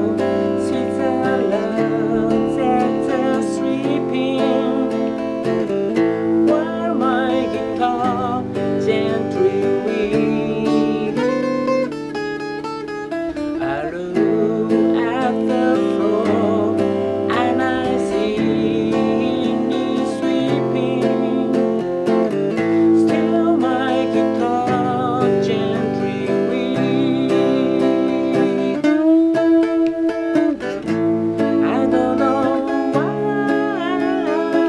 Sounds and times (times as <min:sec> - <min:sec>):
Guitar: 0:00.0 - 0:34.6.